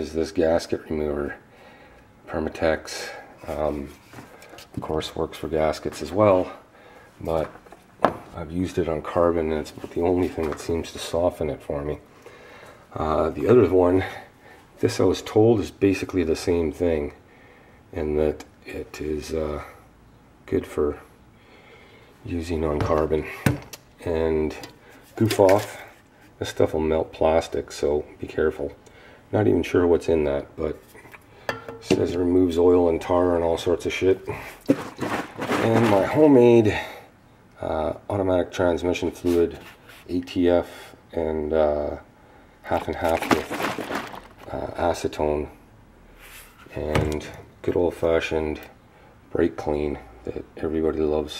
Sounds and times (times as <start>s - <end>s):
Speech: 0.0s - 1.4s, 2.3s - 4.0s, 4.8s - 7.6s, 8.3s - 12.0s, 12.9s - 17.2s, 17.9s - 19.8s, 20.4s - 21.1s, 22.2s - 30.8s, 31.8s - 34.5s, 35.5s - 37.0s, 37.6s - 43.8s, 44.4s - 45.6s, 46.7s - 51.3s
Inside, small room: 0.0s - 51.3s.